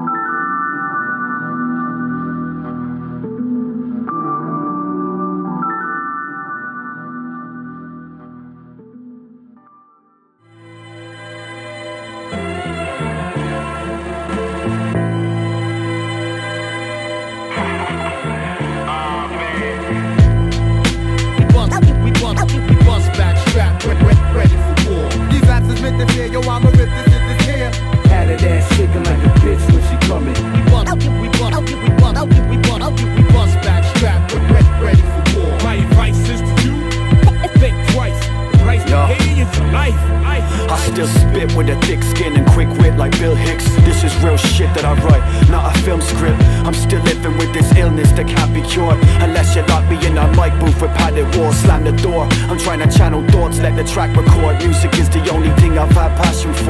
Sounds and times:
Rhythm and blues: 0:00.0 - 0:08.9, 0:11.6 - 0:56.6
Soul music: 0:00.0 - 0:56.6
Disco: 0:17.5 - 0:39.6
Blues: 0:17.5 - 0:56.6.

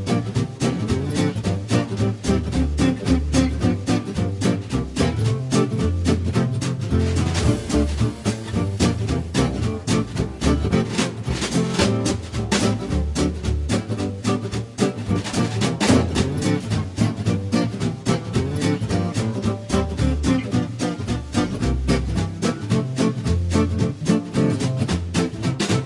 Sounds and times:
Music: 0:00.0 - 0:25.8.

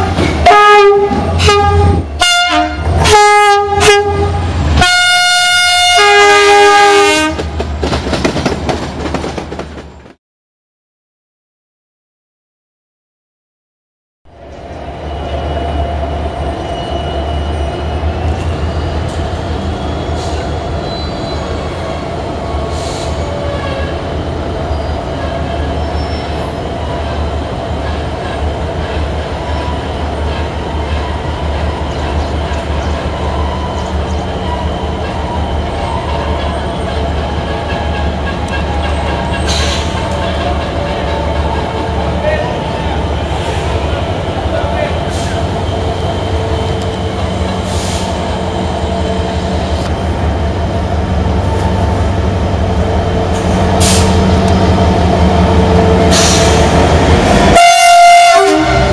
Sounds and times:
Railroad car, train wagon: 0:00.0 - 0:10.2, 0:14.3 - 0:58.9
Train: 0:00.0 - 0:10.2, 0:14.3 - 0:58.9.

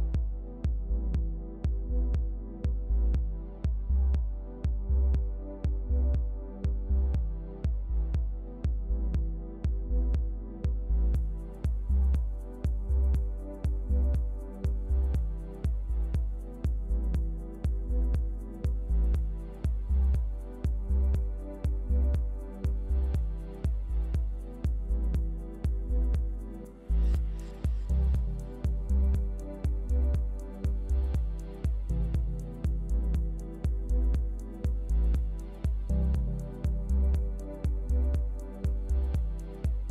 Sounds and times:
Music: 0:00.0 - 0:39.9.

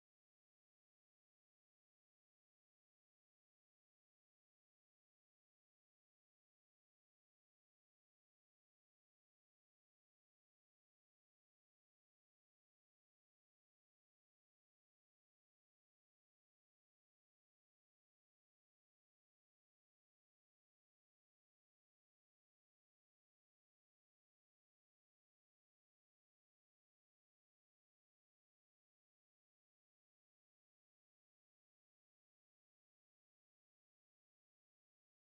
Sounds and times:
Music: 0:00.0 - 0:35.2.

